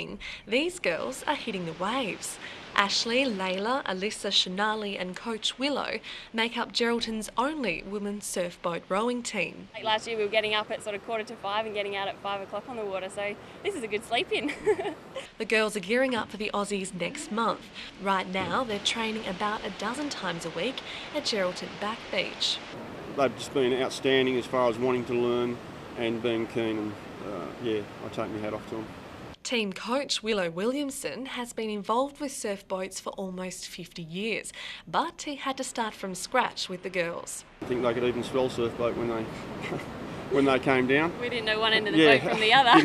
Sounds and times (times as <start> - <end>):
Waves, surf: 0.0 - 29.4, 36.5 - 42.8
Speech: 0.0 - 39.3, 40.3 - 42.8.